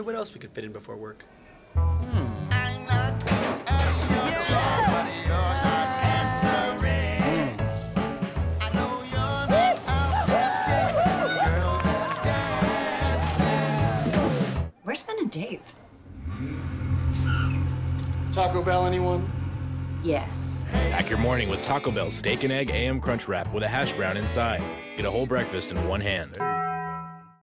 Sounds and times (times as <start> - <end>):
Music: 1.8 - 14.7, 20.3 - 27.4
Speech: 20.1 - 26.4.